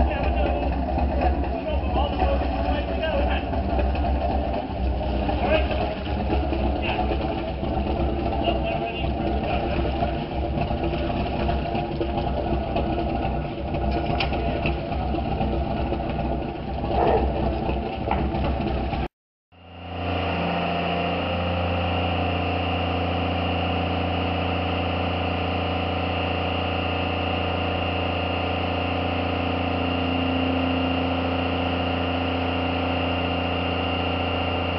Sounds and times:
Speech: 0:00.0 - 0:03.6, 0:05.3 - 0:06.0, 0:06.8 - 0:07.2, 0:08.3 - 0:10.0
Motorboat, speedboat: 0:00.0 - 0:34.7.

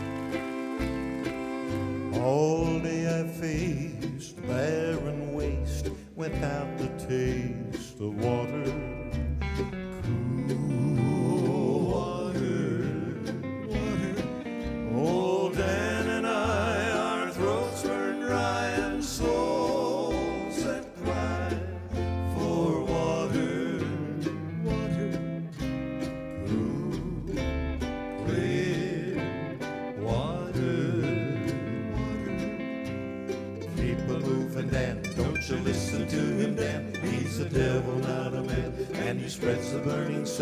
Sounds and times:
Music: 0:00.0 - 0:40.4.

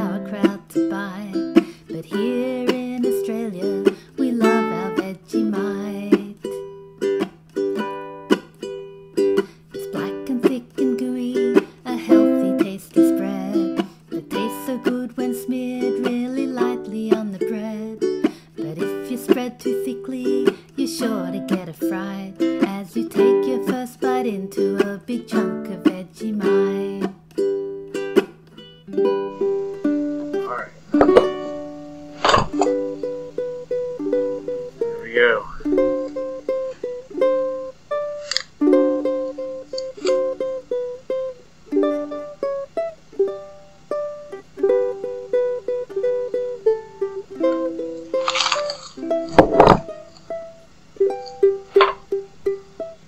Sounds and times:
Inside, small room: 0:00.0 - 0:53.0
Ukulele: 0:00.0 - 0:53.0.

